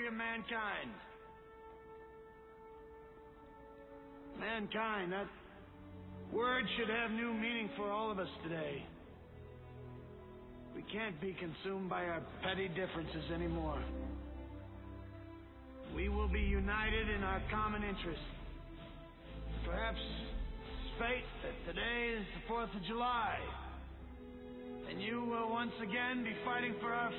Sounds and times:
Male speech, man speaking: 0.0s - 1.2s, 4.4s - 5.6s, 6.3s - 9.0s, 10.8s - 14.1s, 15.9s - 18.5s, 19.6s - 23.8s, 24.8s - 27.1s
Music: 0.0s - 27.1s
Narration, monologue: 0.0s - 27.1s.

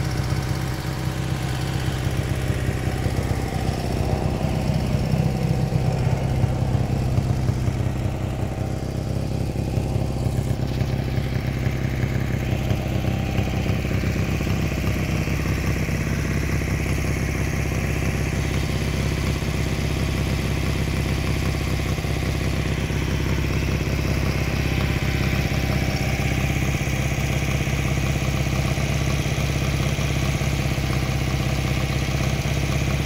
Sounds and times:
Idling: 0.0s - 33.0s
Motorcycle: 0.0s - 33.0s.

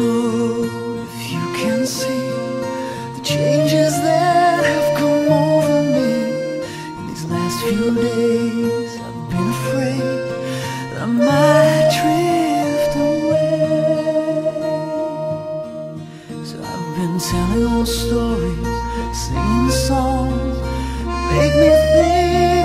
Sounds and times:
Music: 0.0s - 22.6s.

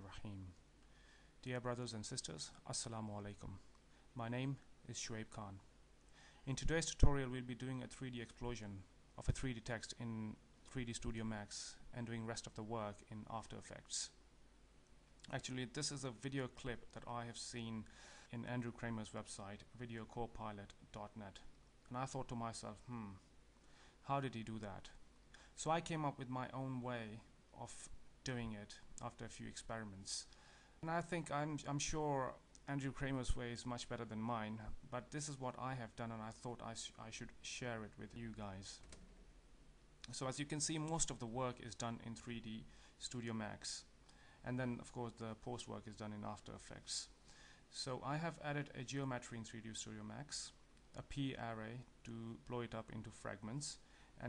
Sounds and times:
Speech: 0.0s - 0.6s, 1.4s - 5.7s, 6.5s - 14.2s, 15.2s - 23.3s, 24.0s - 25.0s, 25.6s - 38.9s, 40.0s - 54.2s.

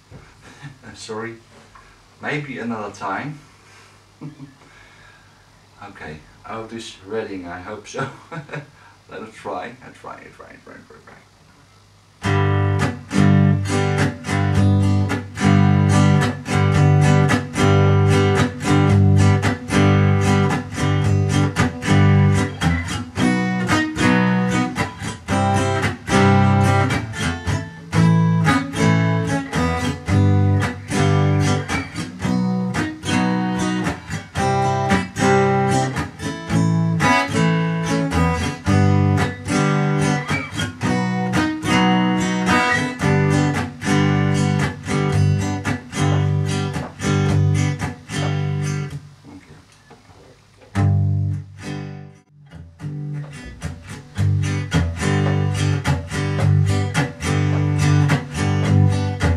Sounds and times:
Strum: 12.2s - 59.3s.

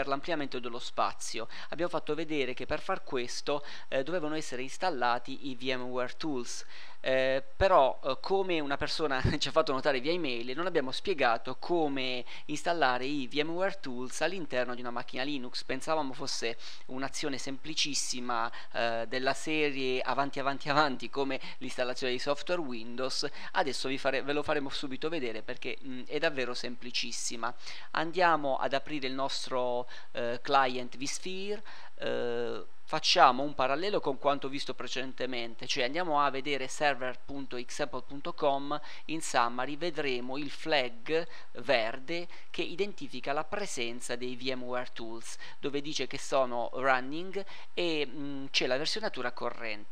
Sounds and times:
Speech: 0.0s - 49.9s.

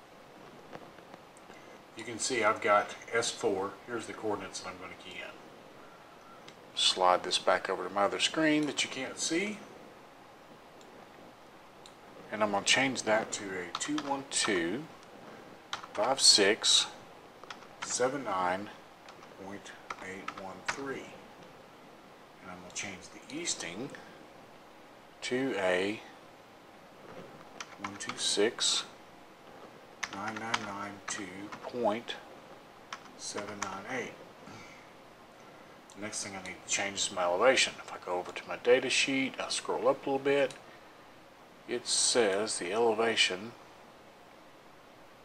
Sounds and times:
Speech: 2.0s - 5.4s, 6.8s - 9.7s, 12.3s - 14.9s, 16.0s - 17.0s, 17.8s - 18.8s, 19.4s - 21.2s, 22.4s - 24.1s, 25.2s - 26.2s, 27.8s - 29.0s, 30.1s - 32.3s, 33.2s - 34.2s, 35.9s - 40.6s, 41.7s - 43.6s
Computer keyboard: 13.7s - 14.6s, 15.7s - 16.2s, 17.5s - 18.0s, 19.1s - 20.8s, 27.6s - 28.2s, 30.0s - 31.6s, 32.9s - 33.8s.

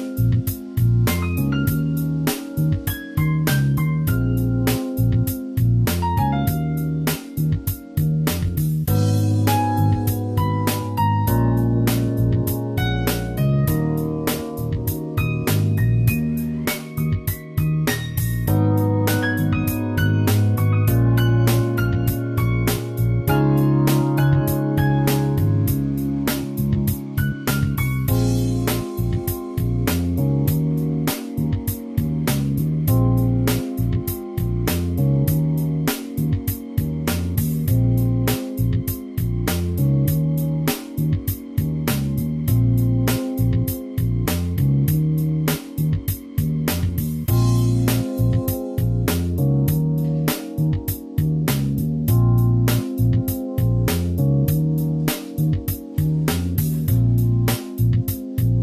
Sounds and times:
Music: 0.0s - 58.6s.

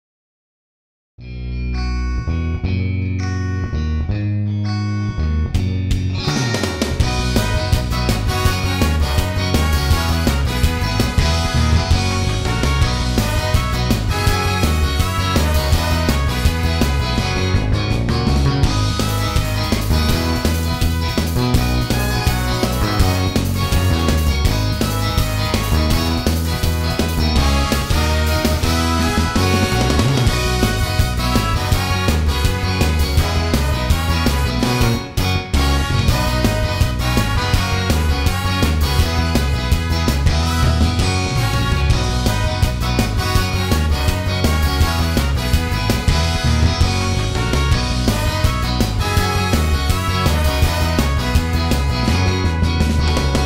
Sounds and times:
Music: 1.2s - 53.4s.

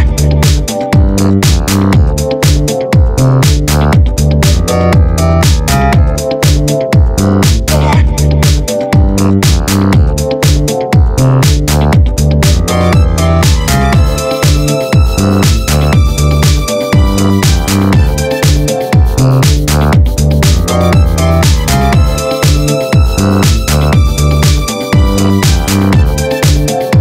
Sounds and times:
Dance music: 0.0s - 27.0s
House music: 0.0s - 27.0s
Techno: 0.0s - 27.0s.

